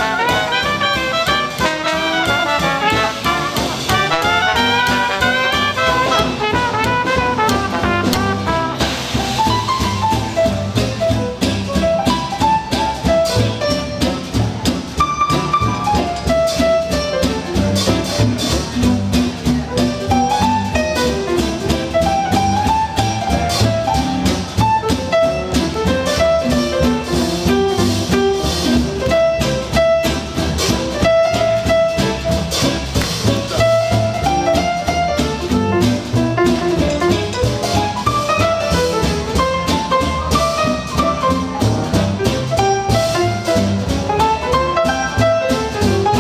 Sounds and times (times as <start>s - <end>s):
Classical music: 0.0s - 46.2s.